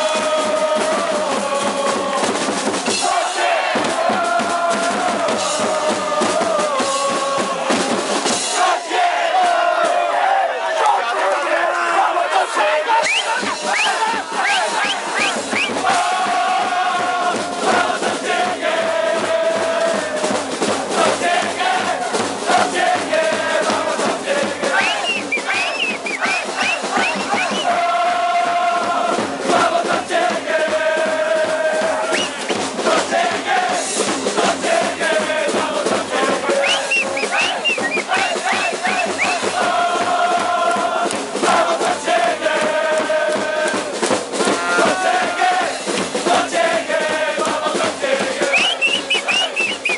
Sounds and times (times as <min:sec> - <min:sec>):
Music: 0:00.0 - 0:10.6, 0:11.5 - 0:49.9.